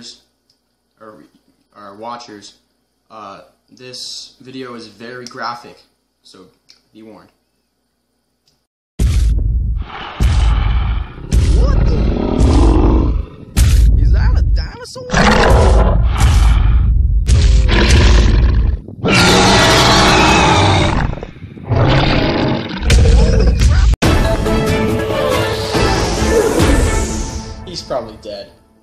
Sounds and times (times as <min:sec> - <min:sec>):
Speech: 0:01.0 - 0:07.4, 0:11.5 - 0:12.1, 0:14.0 - 0:15.3, 0:27.7 - 0:28.5
Grunt: 0:10.0 - 0:13.3, 0:17.5 - 0:23.8.